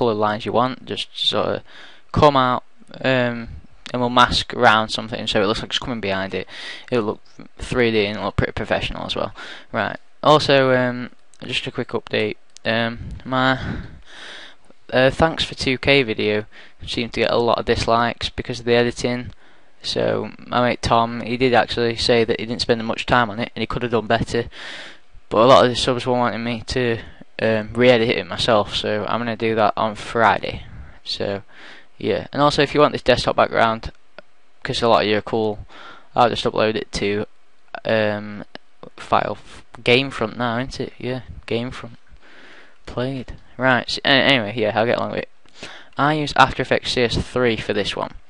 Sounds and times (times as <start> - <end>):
Speech: 0.0 - 14.0, 14.9 - 24.6, 25.3 - 34.0, 34.6 - 42.0, 42.9 - 45.3, 46.0 - 48.2.